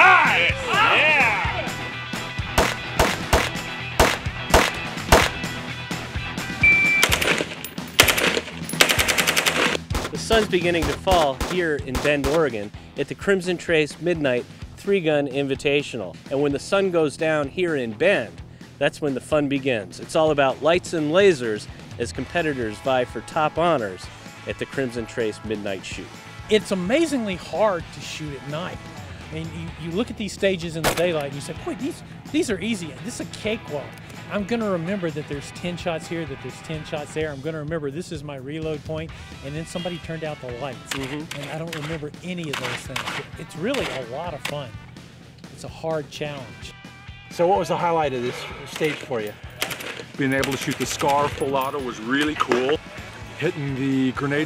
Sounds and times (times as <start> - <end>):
Music: 0.0 - 54.4
Speech: 10.1 - 44.8, 45.5 - 49.4, 50.2 - 52.8, 53.4 - 54.4.